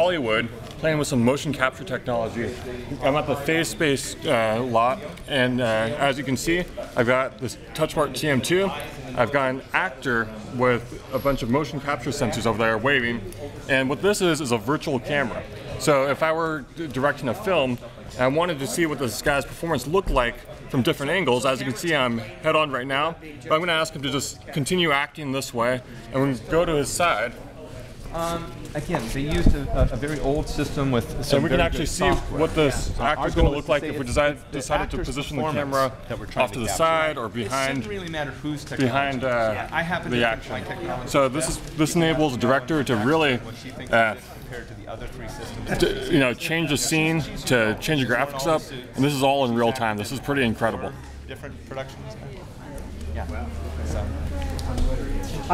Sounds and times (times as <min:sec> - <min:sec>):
Speech: 0:00.0 - 0:55.5.